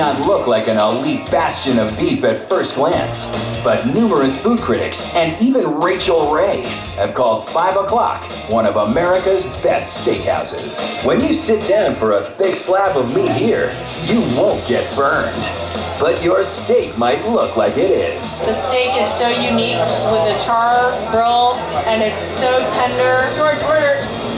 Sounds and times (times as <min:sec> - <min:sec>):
Speech: 0:00.0 - 0:24.1
Music: 0:00.0 - 0:24.3.